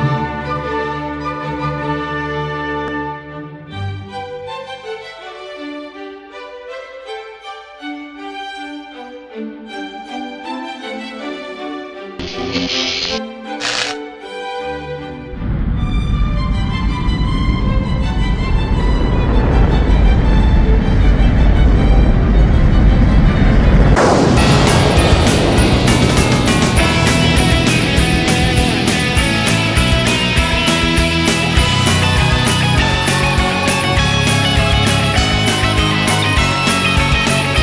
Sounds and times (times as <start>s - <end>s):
Music: 0.0s - 37.6s.